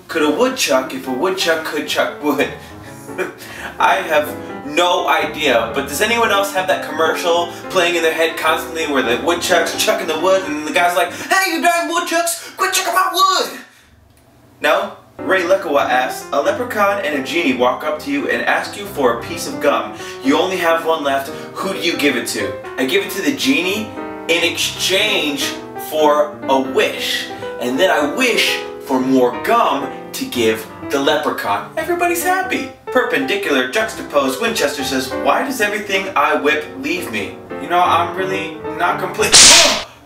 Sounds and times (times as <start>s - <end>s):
Speech: 0.0s - 2.6s, 3.2s - 13.7s, 14.6s - 39.8s
Music: 0.2s - 11.3s, 15.2s - 40.0s.